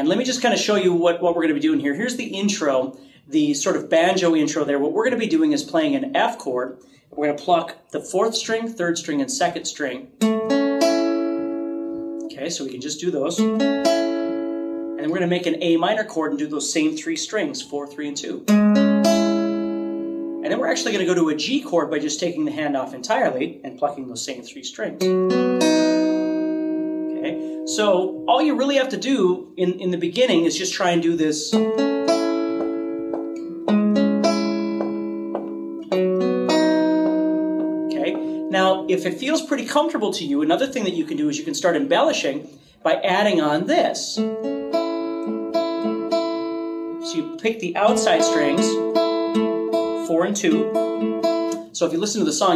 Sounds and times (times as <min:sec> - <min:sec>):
Speech: 0:00.0 - 0:10.1, 0:12.3 - 0:13.4, 0:15.0 - 0:18.5, 0:20.4 - 0:25.0, 0:27.2 - 0:31.6, 0:37.9 - 0:44.2, 0:47.1 - 0:48.8, 0:50.0 - 0:50.7, 0:51.8 - 0:52.5
Acoustic guitar: 0:09.1 - 0:24.0, 0:24.9 - 0:41.0, 0:42.0 - 0:52.5.